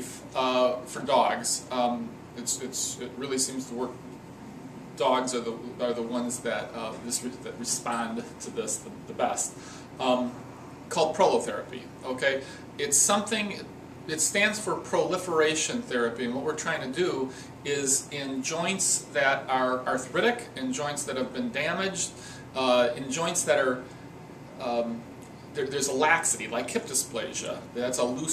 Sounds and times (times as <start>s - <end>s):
Speech: 0.0s - 4.0s, 5.0s - 23.9s, 24.6s - 25.0s, 25.6s - 28.3s.